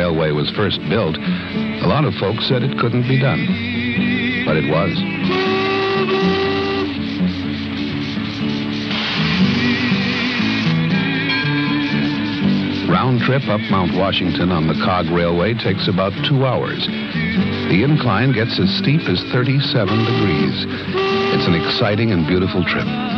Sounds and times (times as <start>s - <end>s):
Speech: 0.0s - 3.5s, 4.5s - 5.0s, 12.9s - 16.9s, 17.7s - 23.0s
Music: 0.0s - 23.1s.